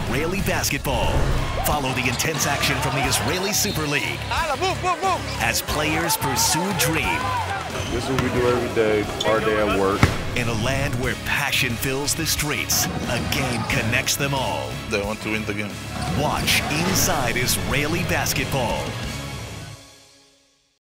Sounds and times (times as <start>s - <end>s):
Speech: 0.0s - 7.3s, 7.9s - 18.9s
Music: 0.0s - 20.8s.